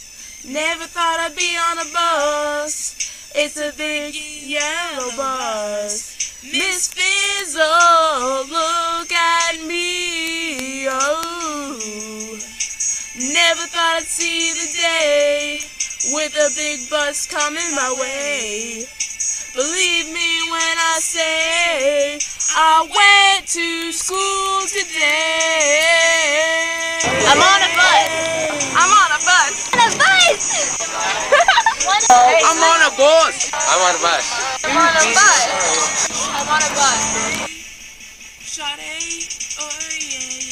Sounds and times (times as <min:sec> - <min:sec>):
Music: 0:00.0 - 0:40.5
Bus: 0:27.0 - 0:31.3, 0:34.7 - 0:37.5
Speech: 0:27.0 - 0:37.5.